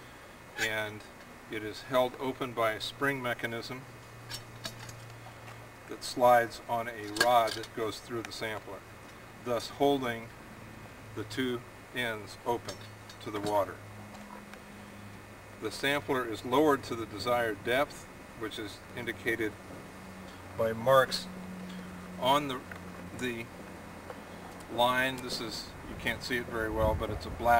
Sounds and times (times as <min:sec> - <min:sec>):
Speech: 0:00.6 - 0:03.9, 0:05.9 - 0:08.8, 0:09.4 - 0:10.3, 0:11.2 - 0:13.8, 0:15.6 - 0:19.6, 0:20.6 - 0:21.3, 0:22.2 - 0:22.6, 0:23.2 - 0:23.5, 0:24.7 - 0:27.5.